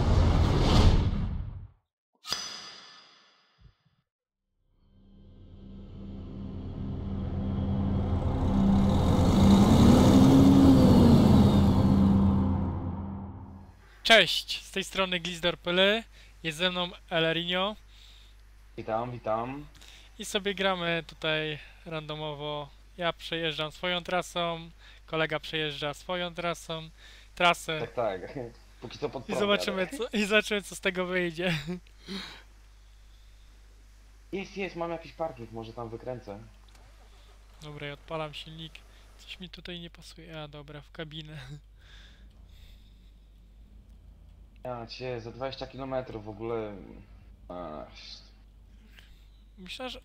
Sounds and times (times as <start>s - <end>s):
Speech: 14.0s - 17.8s, 18.8s - 31.8s, 34.3s - 36.5s, 37.6s - 41.6s, 44.6s - 48.3s, 49.6s - 50.0s.